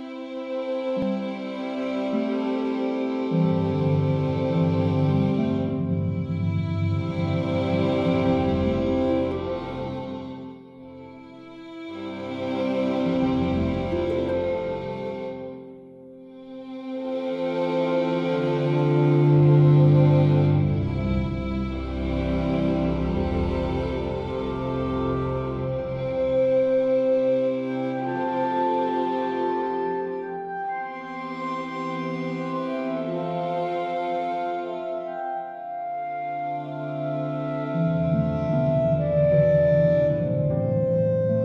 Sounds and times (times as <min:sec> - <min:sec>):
Musical instrument: 0:00.0 - 0:41.4.